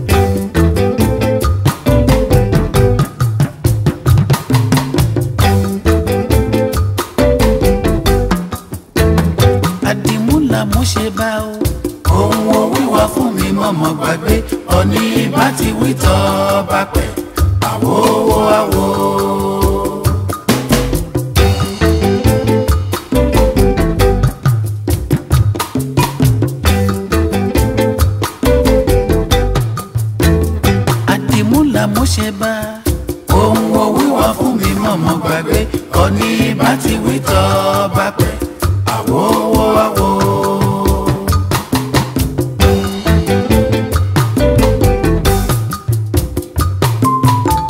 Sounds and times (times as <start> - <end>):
Reggae: 0.0 - 47.6.